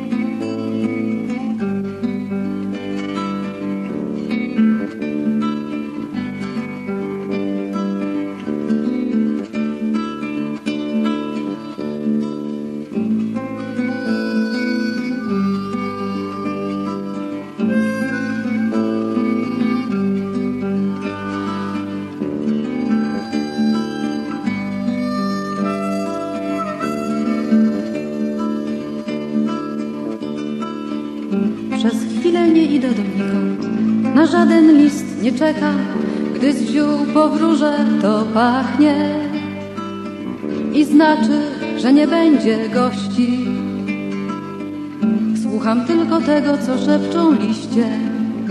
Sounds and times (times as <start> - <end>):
Acoustic guitar: 0.0 - 48.5.